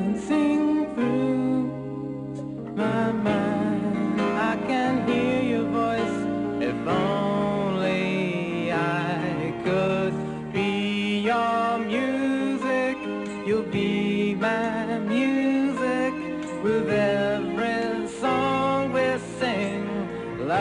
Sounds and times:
Music: 0.0 - 20.6.

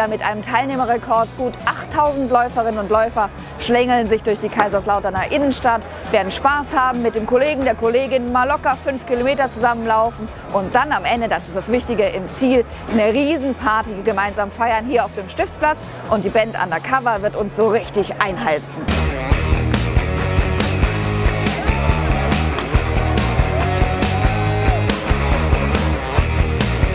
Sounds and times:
Speech: 0.0 - 18.9
Music: 0.0 - 26.9
Outside, urban or manmade: 0.0 - 26.9.

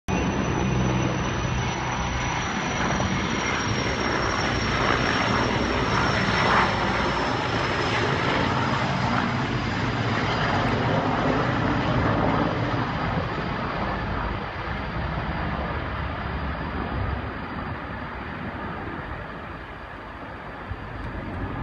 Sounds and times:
Helicopter: 0.1 - 21.6.

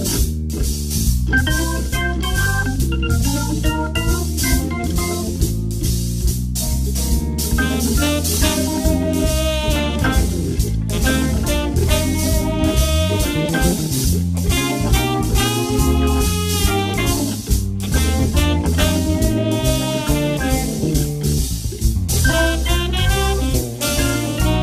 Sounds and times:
Music: 0.0 - 24.6.

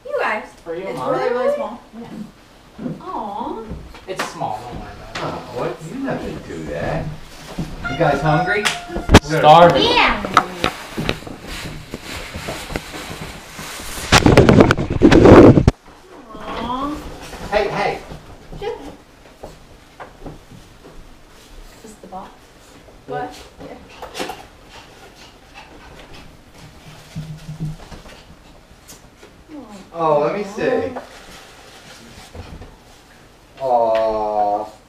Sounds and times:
Inside, small room: 0.0 - 34.8.

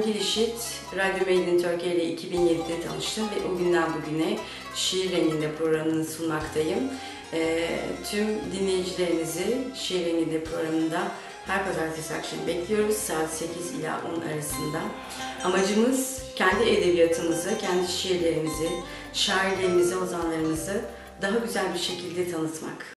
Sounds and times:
Music: 0.0 - 22.9
Speech: 0.0 - 22.9.

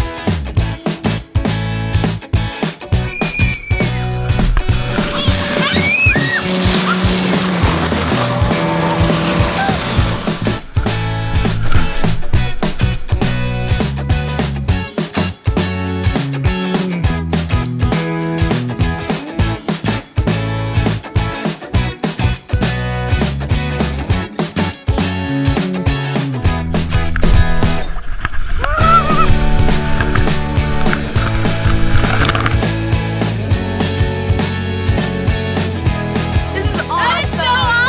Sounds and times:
Music: 0.0 - 37.8.

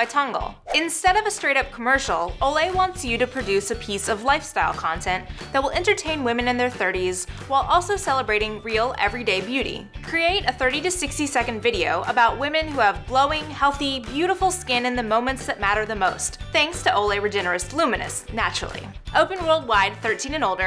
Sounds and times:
Music: 0.0 - 20.6
Speech: 0.0 - 20.6.

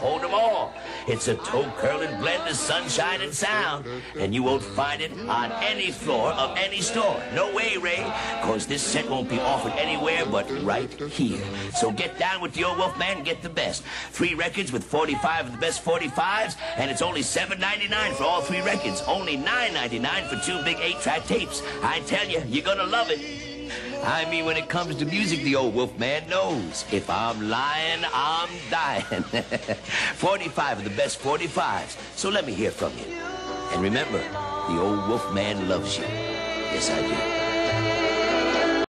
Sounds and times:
Speech: 0.0 - 23.2, 24.0 - 29.1, 30.2 - 33.1, 33.7 - 36.1
Music: 0.0 - 38.8.

